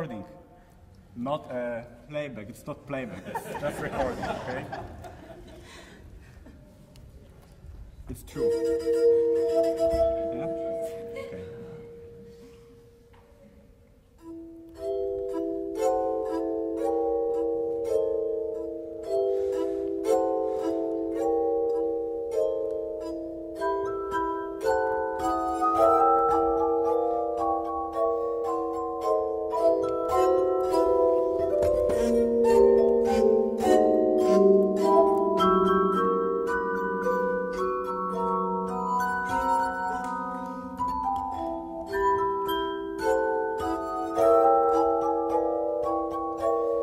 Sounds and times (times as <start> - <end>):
Music: 7.4 - 46.8.